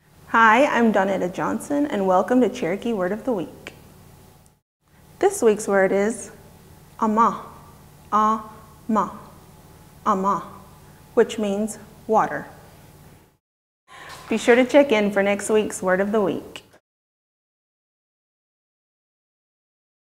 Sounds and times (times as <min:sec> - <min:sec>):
Speech: 0:00.3 - 0:03.7, 0:05.2 - 0:06.4, 0:07.0 - 0:09.3, 0:10.1 - 0:10.6, 0:11.2 - 0:12.6, 0:14.0 - 0:16.8.